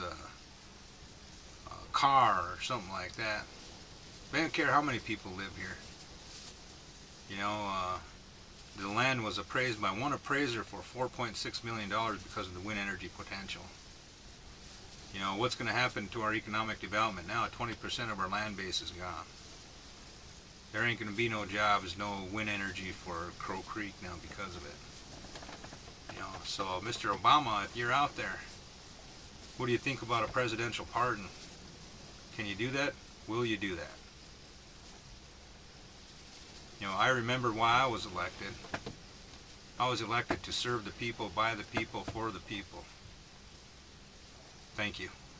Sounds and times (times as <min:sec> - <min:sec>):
Speech: 0:00.0 - 0:00.4, 0:01.6 - 0:03.5, 0:04.3 - 0:05.8, 0:07.3 - 0:08.2, 0:08.8 - 0:13.8, 0:15.1 - 0:19.3, 0:20.7 - 0:24.8, 0:26.1 - 0:28.6, 0:29.6 - 0:31.4, 0:32.3 - 0:34.0, 0:36.8 - 0:38.7, 0:39.8 - 0:42.9, 0:44.8 - 0:45.2.